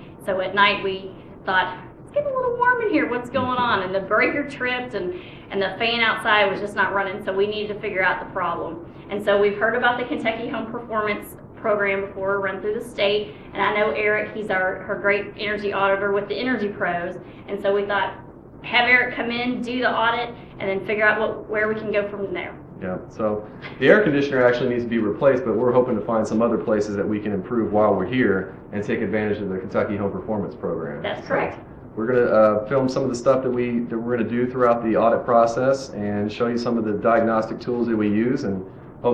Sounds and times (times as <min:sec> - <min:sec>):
Speech: 0:00.3 - 0:06.8, 0:18.7 - 0:39.1.